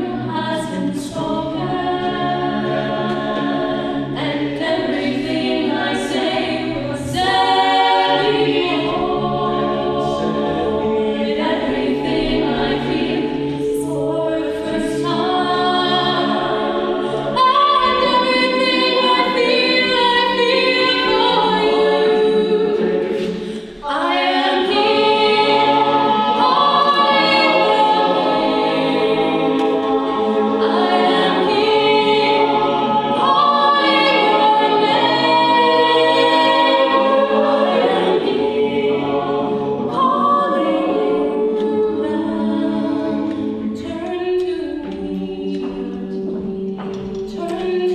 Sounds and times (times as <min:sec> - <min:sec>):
Choir: 0:00.0 - 0:47.9.